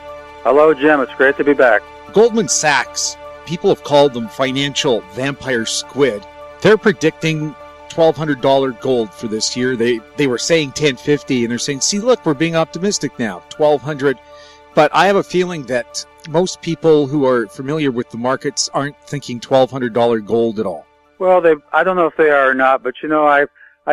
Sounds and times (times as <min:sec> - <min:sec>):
Music: 0:00.0 - 0:23.9
Speech: 0:00.5 - 0:14.2, 0:14.8 - 0:23.9.